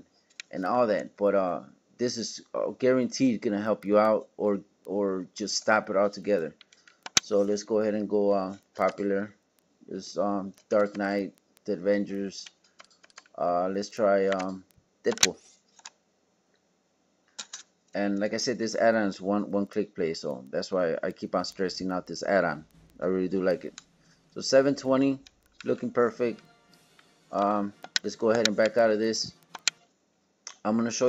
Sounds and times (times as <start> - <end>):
Speech: 0.5 - 6.6, 7.2 - 9.3, 9.9 - 12.5, 13.4 - 15.5, 18.0 - 23.8, 24.4 - 26.6, 27.3 - 29.4, 30.6 - 31.0
Computer keyboard: 6.6 - 7.4, 12.4 - 13.4, 14.2 - 15.9, 27.4 - 29.8.